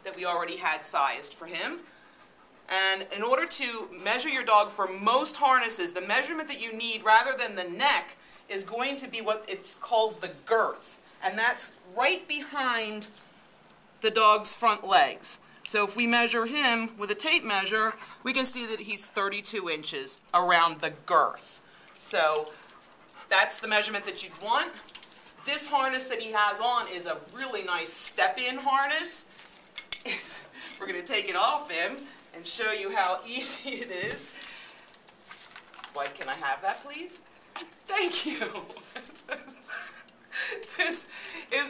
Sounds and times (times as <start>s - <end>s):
Speech: 0.0s - 1.8s, 2.7s - 13.1s, 14.0s - 22.5s, 23.3s - 24.8s, 25.4s - 29.3s, 30.8s - 34.3s, 35.9s - 37.2s, 37.9s - 38.8s, 40.8s - 41.7s.